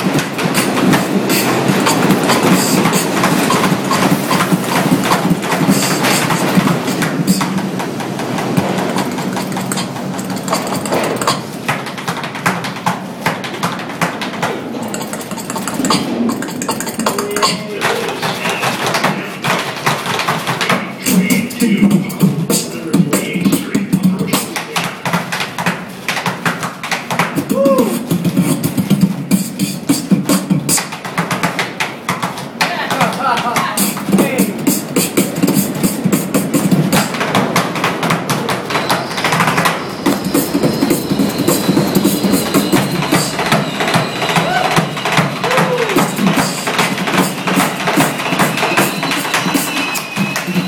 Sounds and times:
Beatboxing: 0.0 - 50.6
Speech: 17.1 - 19.5, 20.6 - 24.9, 32.6 - 34.6.

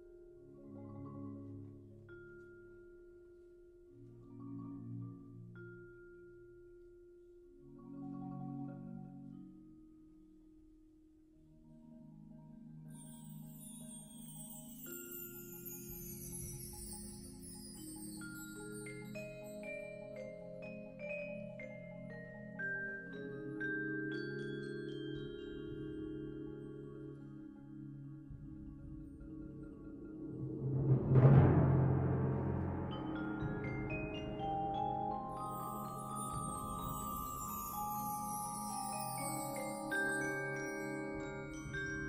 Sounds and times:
Marimba, xylophone: 0.0 - 10.0, 12.9 - 42.0.

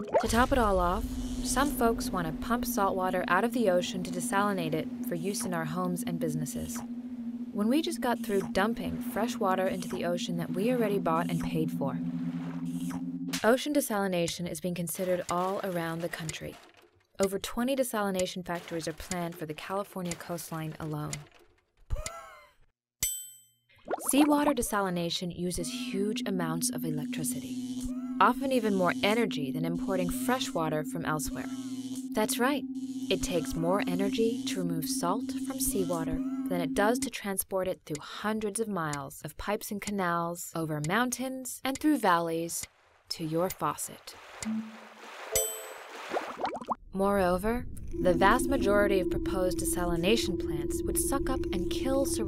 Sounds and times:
Speech: 0.0 - 6.8, 7.6 - 12.0, 13.4 - 16.6, 17.2 - 21.2, 24.1 - 27.5, 28.2 - 31.5, 32.2 - 44.2, 47.0 - 52.2
Water: 0.0 - 6.8, 7.6 - 13.5, 14.9 - 17.0, 18.2 - 20.2, 23.8 - 24.8, 42.6 - 46.8
Music: 0.3 - 13.4, 28.2 - 37.2, 48.0 - 52.2.

